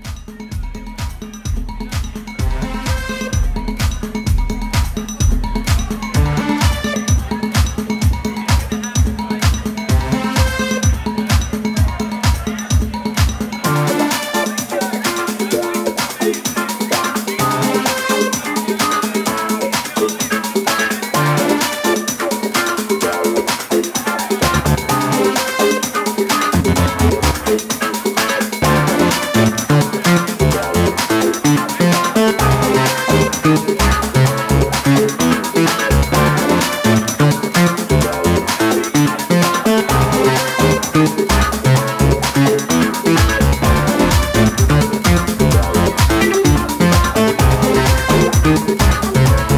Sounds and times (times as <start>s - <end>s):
Music: 0.0s - 49.5s.